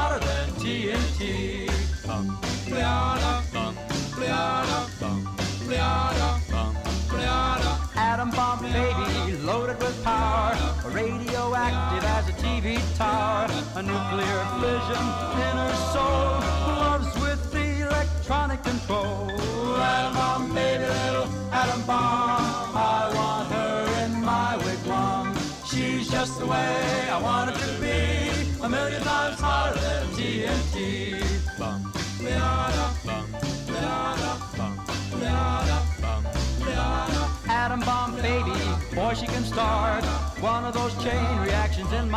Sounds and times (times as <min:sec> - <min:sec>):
Music: 0:00.0 - 0:42.1.